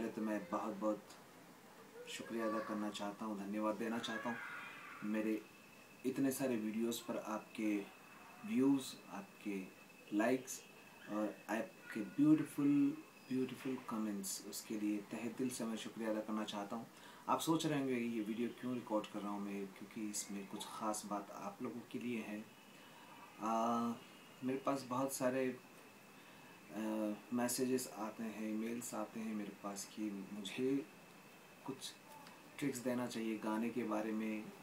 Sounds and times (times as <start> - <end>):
Speech: 0.0 - 1.2, 2.1 - 5.4, 6.1 - 7.9, 8.5 - 22.5, 23.4 - 25.6, 26.7 - 30.9, 31.7 - 32.0, 32.6 - 34.6.